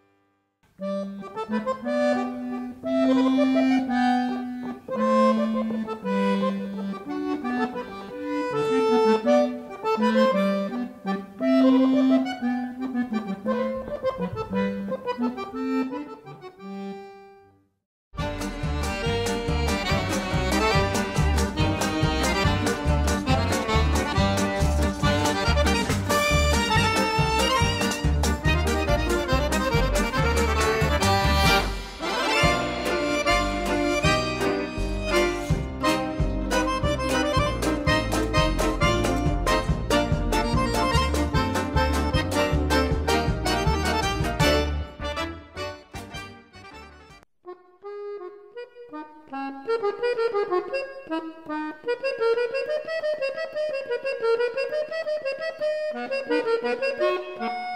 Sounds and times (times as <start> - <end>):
Classical music: 0.8 - 15.6, 18.2 - 47.2.